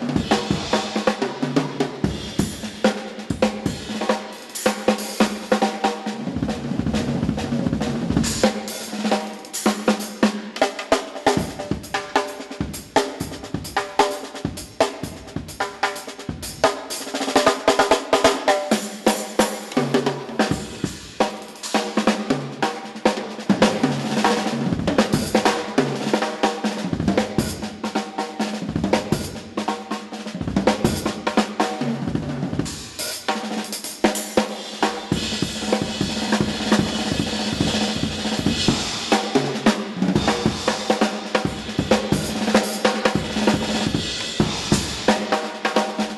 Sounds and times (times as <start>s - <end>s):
Drum kit: 0.0s - 46.1s.